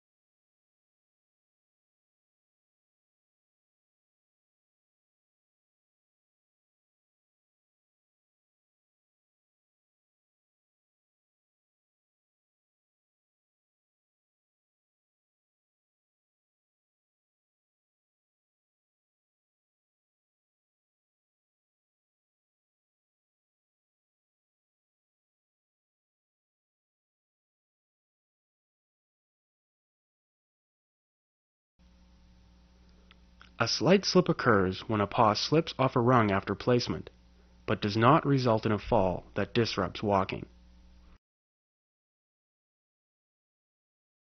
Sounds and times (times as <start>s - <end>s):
Silence: 31.8s - 35.0s, 36.1s - 41.2s
Speech: 33.6s - 37.1s, 37.7s - 40.5s.